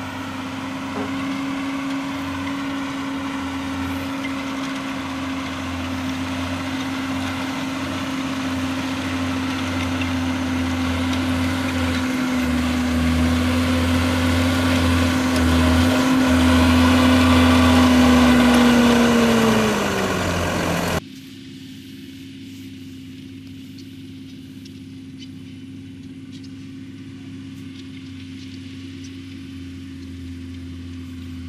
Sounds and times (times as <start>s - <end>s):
Crackle: 21.1s - 31.4s.